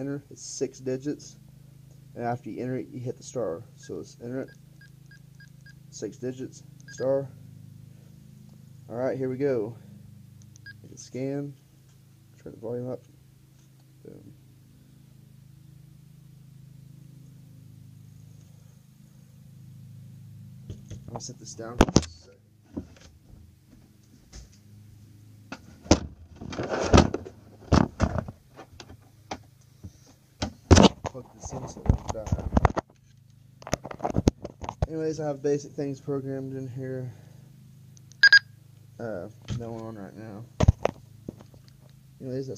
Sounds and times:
Speech: 0.0s - 1.4s, 2.2s - 4.5s, 5.9s - 7.4s, 8.9s - 9.8s, 10.8s - 11.6s, 12.4s - 13.0s, 14.0s - 14.3s, 21.1s - 22.4s, 31.1s - 32.5s, 34.9s - 37.2s, 39.0s - 40.5s, 42.2s - 42.5s.

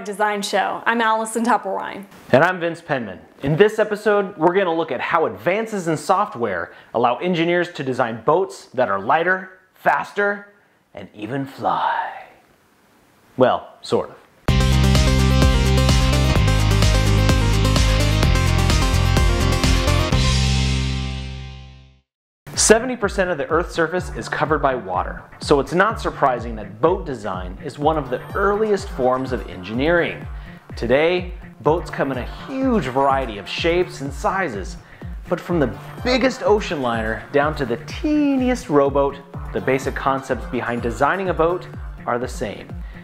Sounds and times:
Speech: 0.0s - 12.4s, 13.4s - 14.2s, 22.6s - 30.2s, 30.8s - 42.7s
Music: 14.5s - 43.0s.

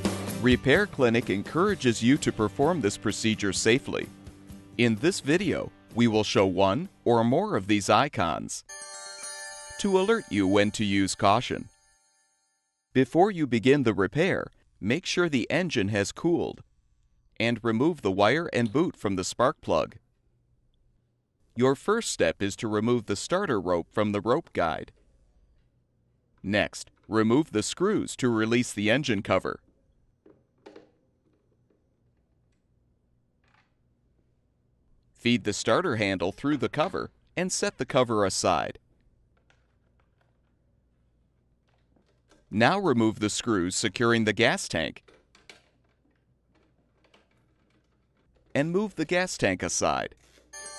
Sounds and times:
Music: 0.0s - 7.8s, 8.7s - 12.8s
Speech: 0.4s - 4.1s, 4.8s - 8.7s, 9.8s - 11.7s, 13.0s - 16.6s, 17.4s - 20.0s, 21.6s - 25.0s, 26.4s - 29.6s, 35.2s - 38.8s, 42.5s - 45.0s, 48.6s - 50.2s.

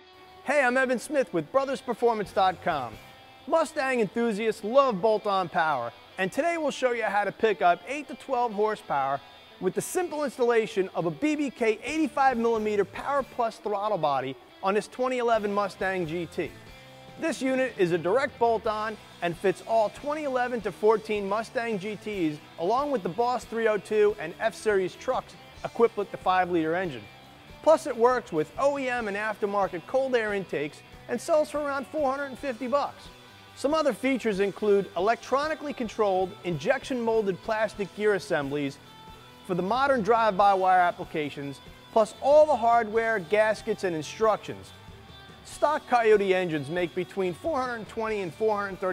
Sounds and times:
Music: 0.0s - 48.9s
Speech: 0.5s - 16.5s, 17.2s - 27.0s, 27.6s - 38.8s, 39.5s - 44.7s, 45.5s - 48.9s.

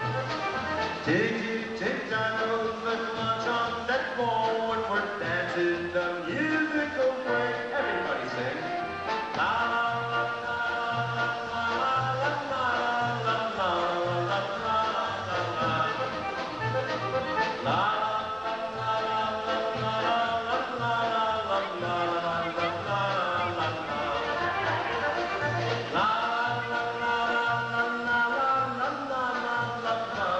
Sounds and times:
Music: 0.0s - 30.3s.

